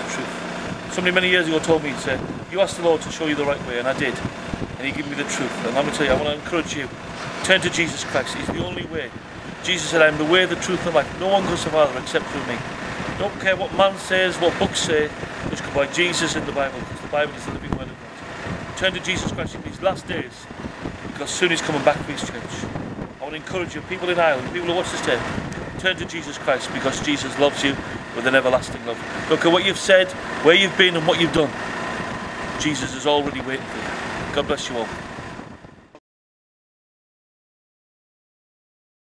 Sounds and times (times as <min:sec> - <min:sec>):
Speech: 0:00.0 - 0:12.6, 0:13.2 - 0:18.0, 0:18.8 - 0:20.5, 0:21.2 - 0:31.6, 0:32.6 - 0:35.0.